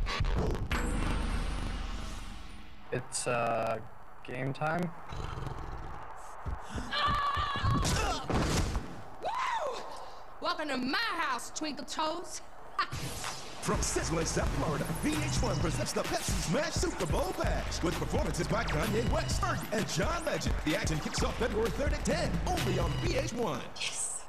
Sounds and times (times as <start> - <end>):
Music: 13.6 - 23.6.